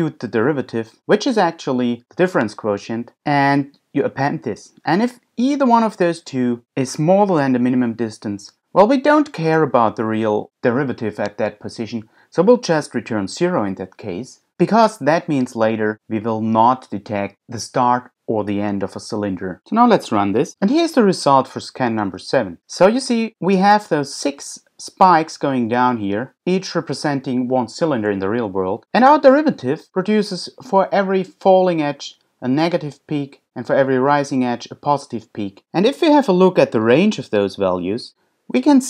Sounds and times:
Speech: 0.0s - 38.8s.

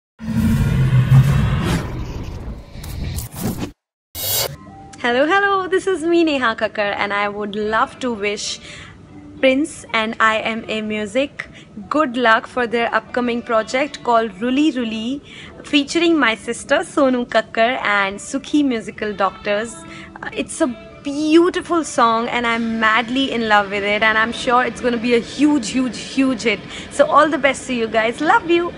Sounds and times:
Music: 4.2s - 28.7s.

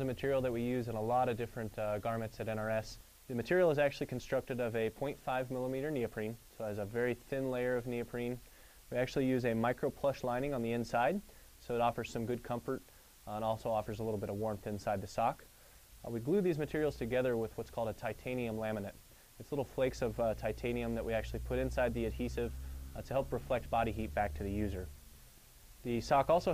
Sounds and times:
Speech: 0.0s - 25.0s, 25.8s - 26.5s.

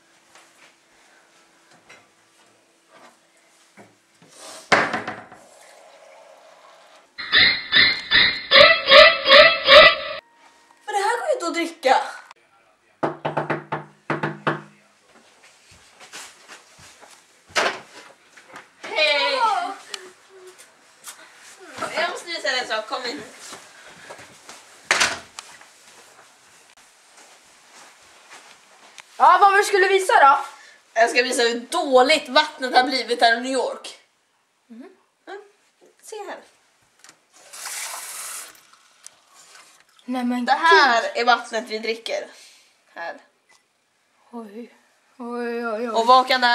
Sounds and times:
Speech: 10.9s - 13.0s, 29.2s - 34.0s, 40.1s - 42.4s, 44.3s - 46.5s.

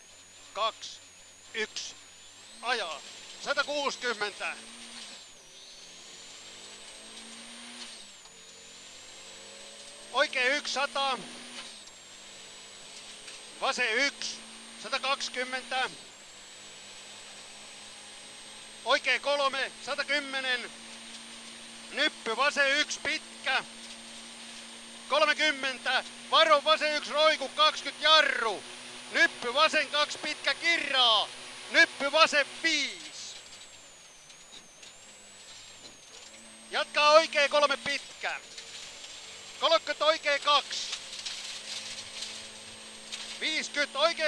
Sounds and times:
Speech: 0.6s - 1.0s, 1.6s - 2.0s, 2.6s - 4.6s, 10.2s - 11.2s, 13.6s - 16.0s, 18.9s - 20.7s, 21.9s - 23.7s, 25.1s - 33.4s, 36.7s - 38.5s, 39.6s - 41.0s, 43.4s - 44.2s.

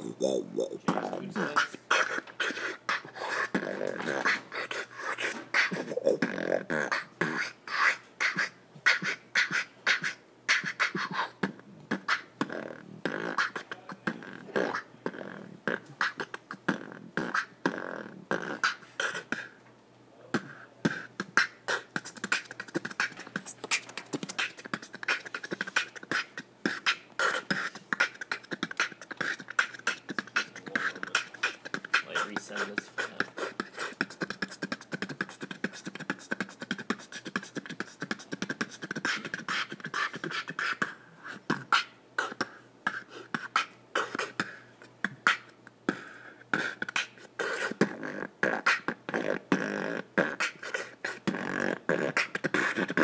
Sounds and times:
Beatboxing: 0.0s - 19.6s, 20.2s - 53.0s.

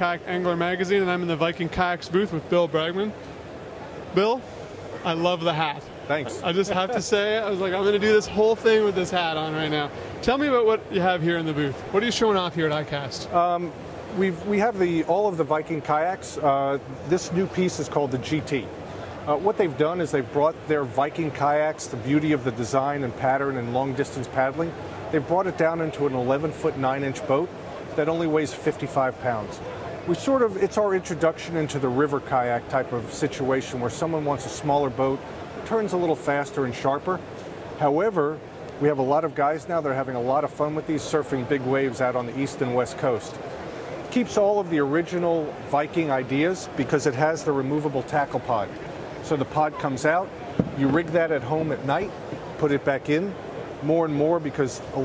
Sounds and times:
Speech: 0.0s - 3.2s, 5.0s - 18.7s, 19.3s - 37.2s, 37.8s - 43.4s, 44.1s - 55.0s.

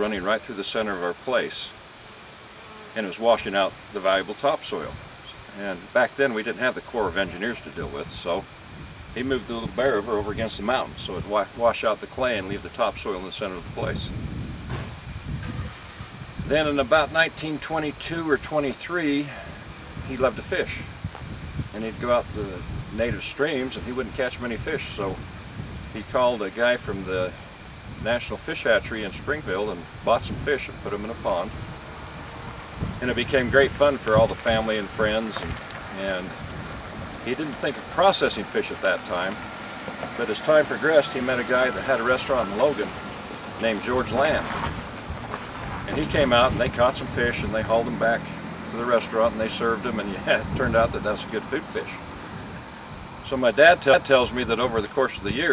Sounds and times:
Speech: 0.0s - 1.8s, 3.0s - 8.5s, 9.2s - 14.2s, 16.5s - 19.5s, 20.1s - 20.9s, 21.7s - 25.2s, 26.0s - 27.4s, 28.0s - 31.6s, 33.0s - 36.4s, 37.3s - 39.4s, 40.2s - 43.0s, 43.6s - 44.6s, 45.9s - 52.0s, 53.2s - 55.5s.

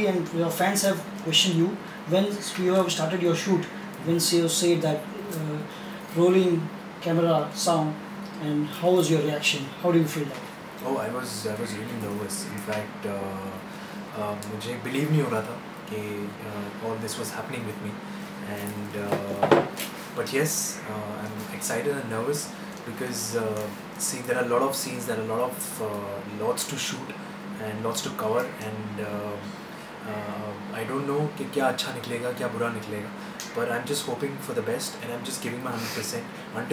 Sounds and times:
Speech: 0.0s - 36.7s.

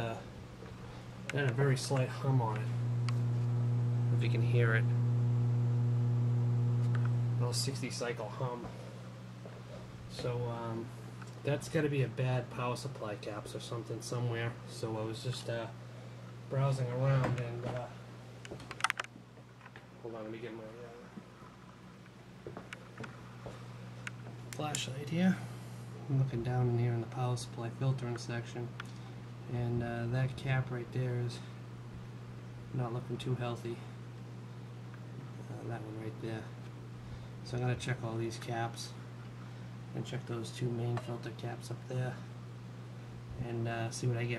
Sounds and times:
Speech: 0.0s - 0.3s, 1.3s - 2.8s, 4.1s - 5.0s, 7.4s - 8.8s, 10.1s - 15.8s, 16.5s - 18.0s, 20.0s - 21.1s, 24.6s - 28.8s, 29.5s - 31.6s, 32.7s - 33.9s, 35.4s - 36.6s, 37.4s - 39.0s, 39.9s - 42.3s, 43.4s - 44.3s.

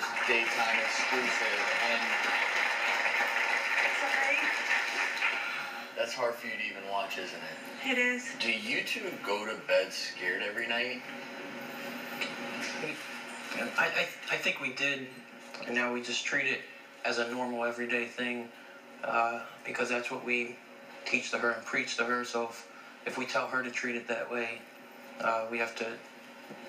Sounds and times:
Television: 0.0s - 26.6s.

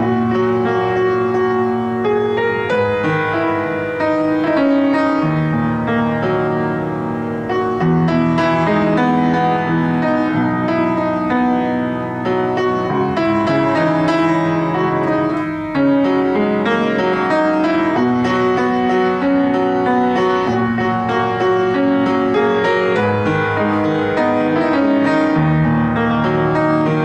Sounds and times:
Piano: 0.0s - 27.0s.

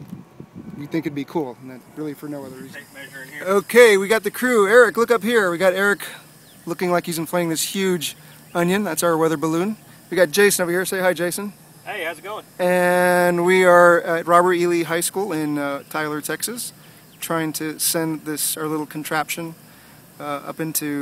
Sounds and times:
Speech: 0.8s - 19.6s, 20.2s - 21.0s.

